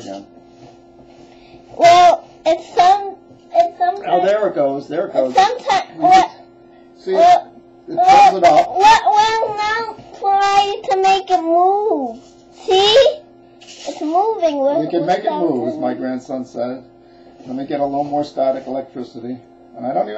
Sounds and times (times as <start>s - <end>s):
Speech: 4.0s - 6.3s, 13.9s - 16.8s.